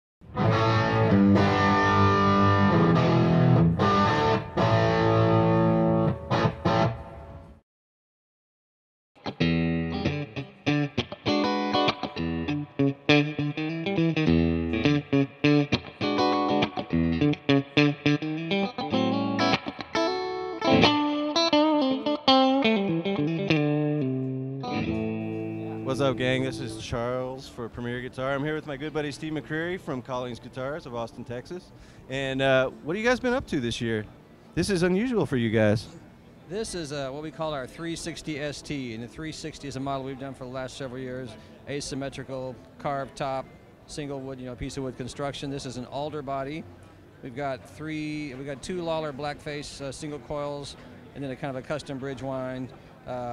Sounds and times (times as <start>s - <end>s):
Electric guitar: 0.2s - 7.6s, 9.2s - 27.2s
Acoustic guitar: 9.4s - 27.2s.